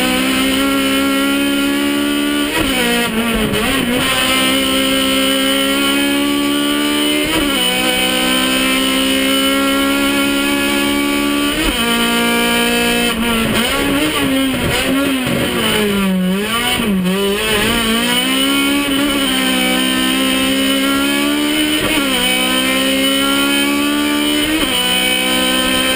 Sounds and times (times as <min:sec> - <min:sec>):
Car: 0:00.0 - 0:25.9.